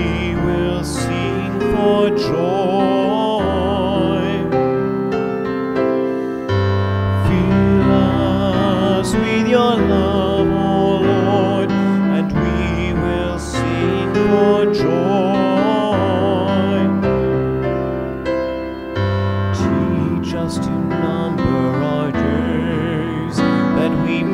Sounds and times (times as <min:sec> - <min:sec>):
Music: 0:00.0 - 0:24.3.